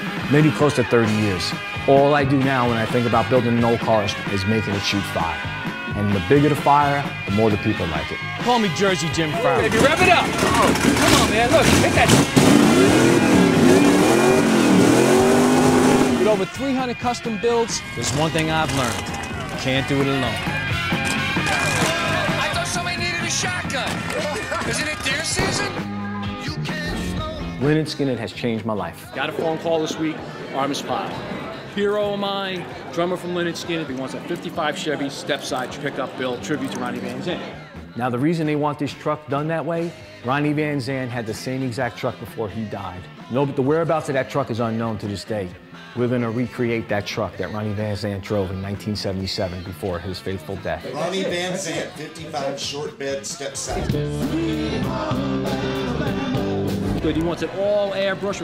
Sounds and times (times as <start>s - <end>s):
Music: 0.0s - 58.4s.